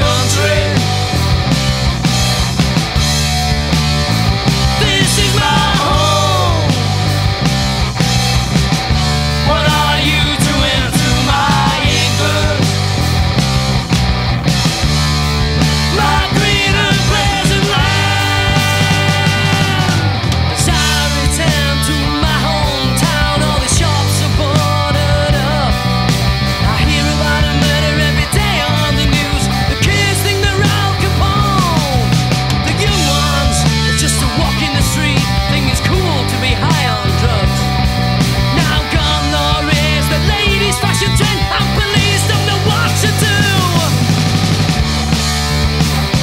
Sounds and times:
Singing: 0.0 - 1.1, 4.8 - 7.0, 9.4 - 12.8, 15.8 - 25.8, 26.6 - 37.6, 38.5 - 44.1
Progressive rock: 0.0 - 46.2
Punk rock: 0.0 - 46.2.

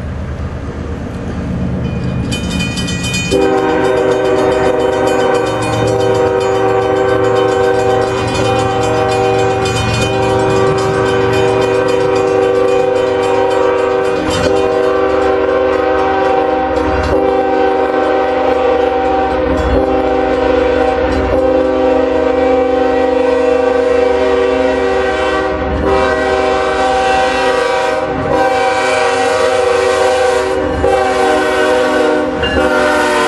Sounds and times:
Outside, urban or manmade: 0.0 - 33.2
Train: 0.0 - 33.2
Vehicle horn, car horn, honking: 3.4 - 5.5, 17.2 - 33.2.

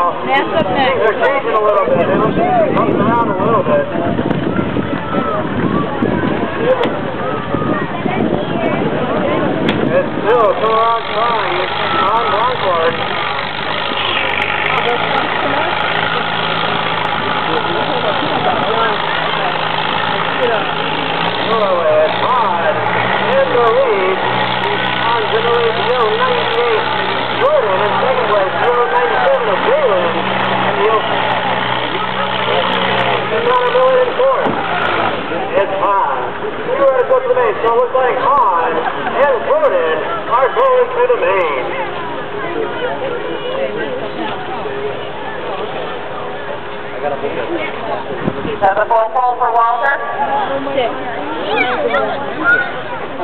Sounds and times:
Speech: 20.2 - 53.2.

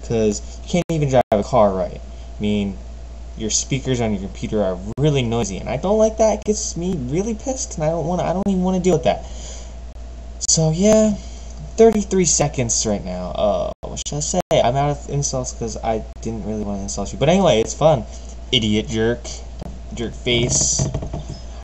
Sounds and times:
Speech: 0.0 - 2.8, 3.4 - 9.2, 10.4 - 20.9.

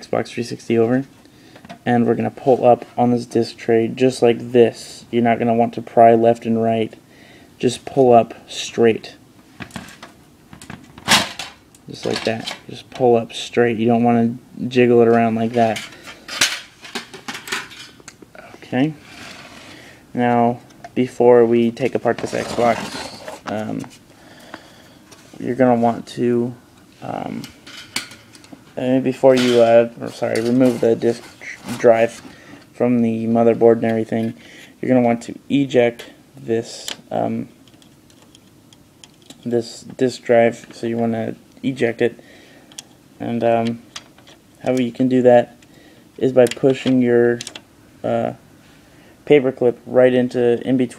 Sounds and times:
Speech: 0.0 - 1.1, 1.8 - 7.0, 7.6 - 9.2, 11.9 - 15.9, 18.4 - 19.0, 20.1 - 23.9, 25.4 - 27.6, 28.8 - 32.2, 32.8 - 37.5, 39.4 - 42.2, 43.2 - 43.8, 44.6 - 45.6, 46.2 - 48.4, 49.3 - 50.9
Inside, small room: 0.0 - 50.9.

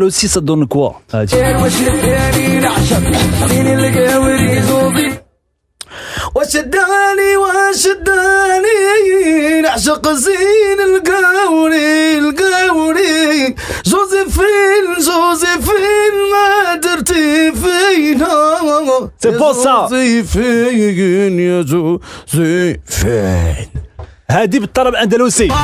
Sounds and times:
Speech: 0.0 - 1.4, 19.2 - 20.0, 22.9 - 25.6
Music: 1.3 - 5.4, 25.3 - 25.6.

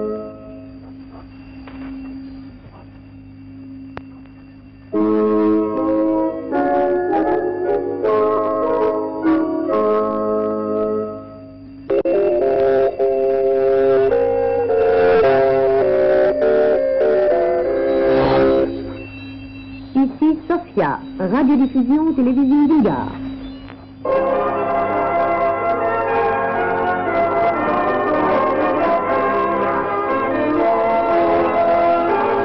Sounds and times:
Music: 0.0 - 2.2, 3.1 - 32.4
Speech: 20.0 - 23.2
Radio: 20.0 - 23.9.

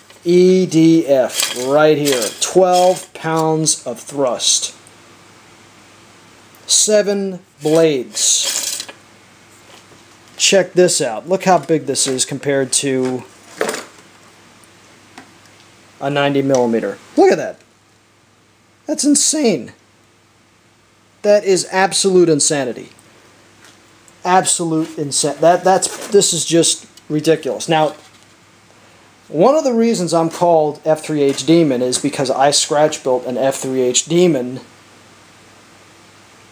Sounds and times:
Speech: 0.2 - 4.8, 6.6 - 8.8, 10.4 - 13.3, 16.0 - 17.7, 18.9 - 19.8, 21.2 - 23.0, 24.2 - 28.0, 29.3 - 34.7.

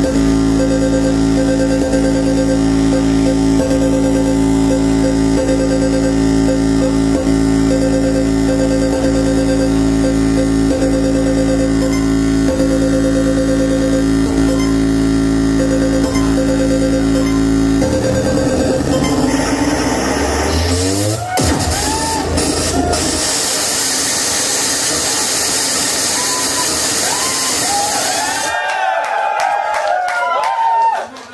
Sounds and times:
Music: 0.0 - 28.5.

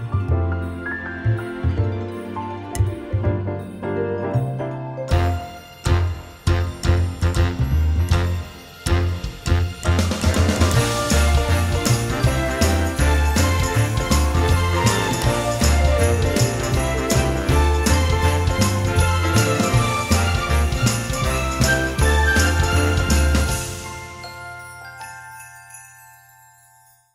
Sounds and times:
Jingle bell: 0.0 - 27.1.

